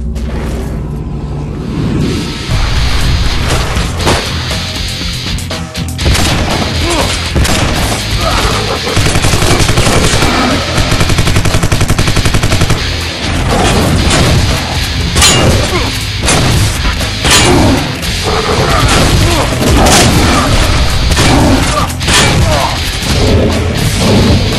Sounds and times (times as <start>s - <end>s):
Music: 0.0s - 24.5s.